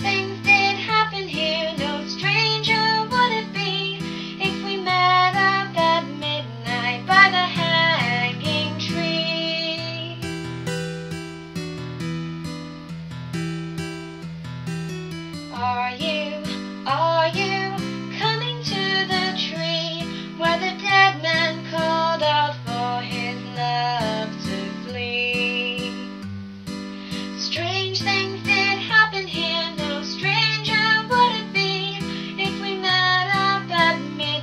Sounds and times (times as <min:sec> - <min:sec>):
Lullaby: 0:00.0 - 0:11.1, 0:14.9 - 0:26.3, 0:27.0 - 0:34.4.